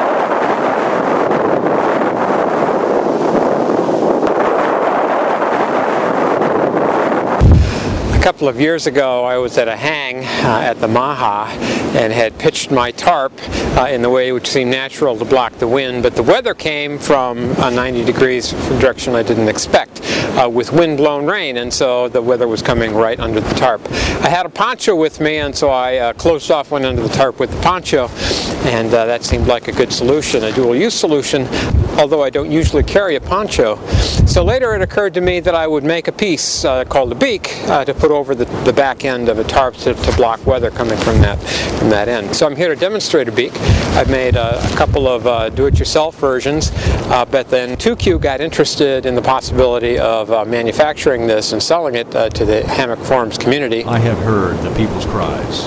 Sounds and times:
Speech: 8.1s - 55.6s.

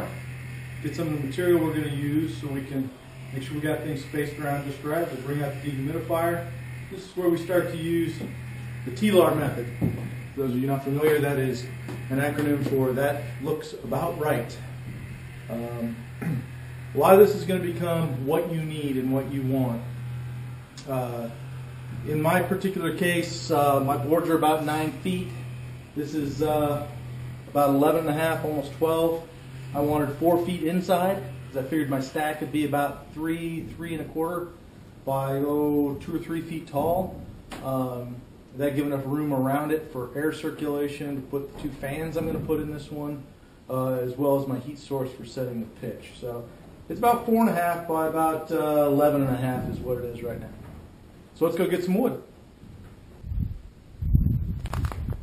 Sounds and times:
Speech: 0.8s - 9.8s, 10.4s - 14.7s, 15.5s - 16.0s, 17.0s - 19.9s, 20.8s - 21.4s, 22.0s - 25.4s, 26.0s - 50.7s, 51.4s - 52.3s.

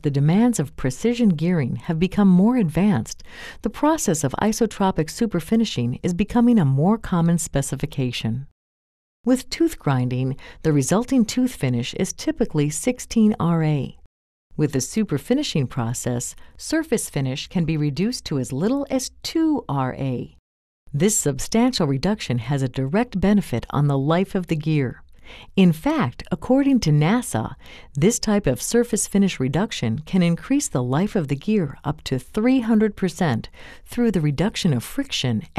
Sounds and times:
Speech: 0.0s - 8.5s, 9.3s - 14.0s, 14.6s - 25.0s, 25.6s - 35.5s.

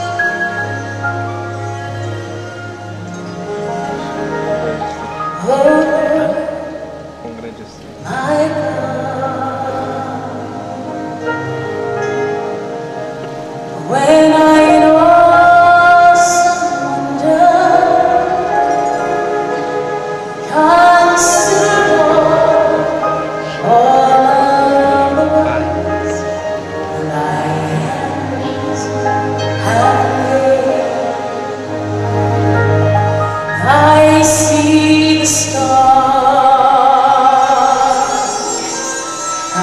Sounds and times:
Music: 0.0s - 39.6s
Female singing: 13.8s - 19.1s, 20.5s - 31.4s, 33.6s - 38.6s.

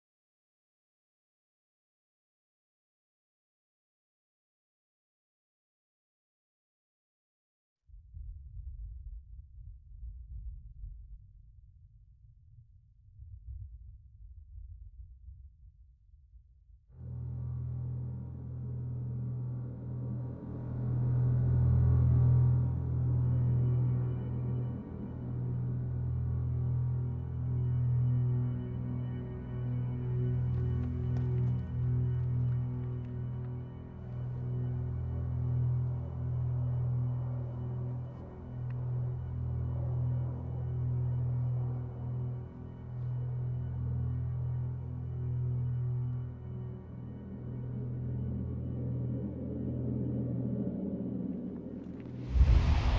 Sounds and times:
Music: 7.9s - 52.9s.

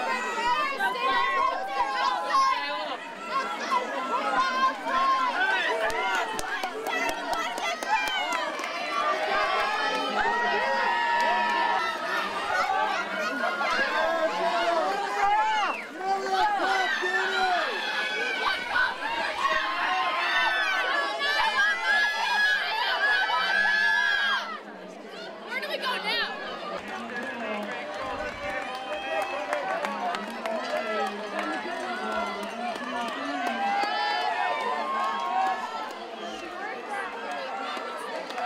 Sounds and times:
Run: 0.0s - 38.4s
Speech: 0.0s - 38.4s.

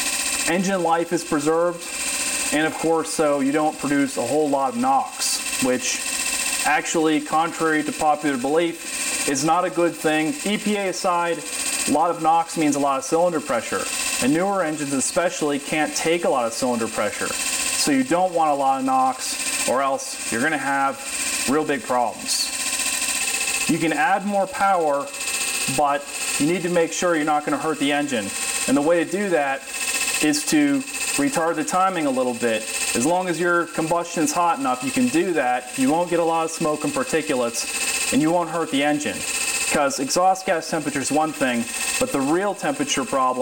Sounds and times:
Speech: 0.5s - 1.8s, 2.5s - 6.0s, 6.6s - 22.5s, 23.7s - 25.1s, 25.7s - 29.6s, 30.2s - 43.4s.

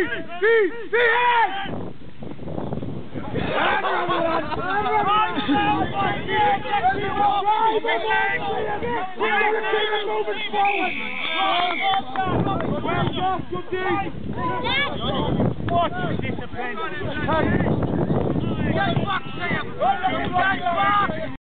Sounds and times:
Speech: 0.0s - 1.7s, 3.2s - 21.4s.

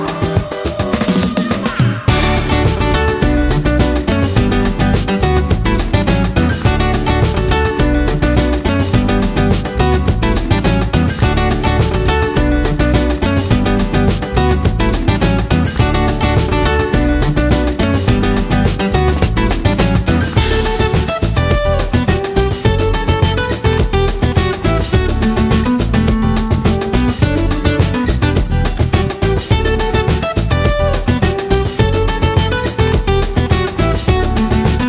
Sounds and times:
Music: 0.0s - 34.8s.

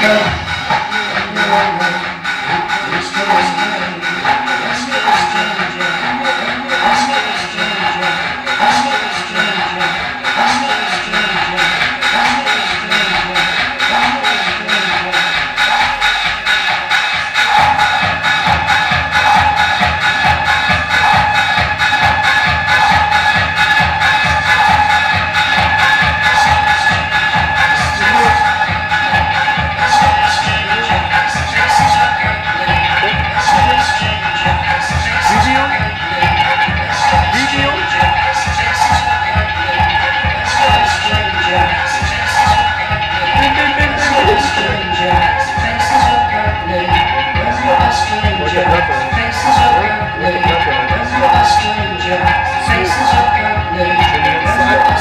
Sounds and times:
Speech: 0.0s - 15.7s, 27.8s - 28.6s, 29.9s - 38.4s, 39.7s - 42.0s, 43.2s - 55.0s
Techno: 0.0s - 55.0s.

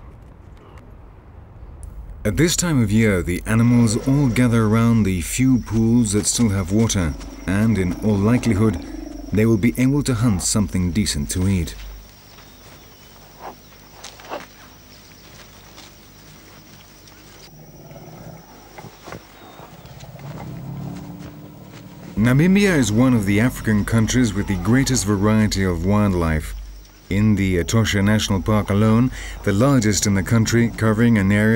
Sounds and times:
Outside, rural or natural: 0.0s - 31.5s
Speech: 2.3s - 11.8s, 22.2s - 31.5s
Animal: 3.6s - 12.0s, 17.0s - 31.5s.

